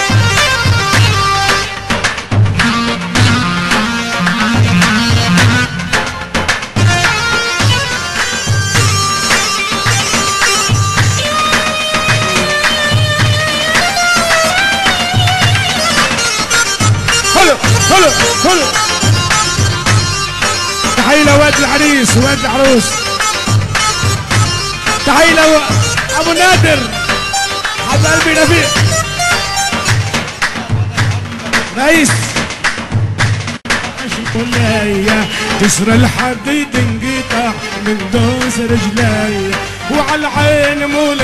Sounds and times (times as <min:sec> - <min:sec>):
Music: 0:00.0 - 0:41.2
Speech: 0:17.3 - 0:18.8, 0:21.0 - 0:23.0, 0:25.0 - 0:27.0, 0:27.9 - 0:28.9, 0:30.6 - 0:32.4.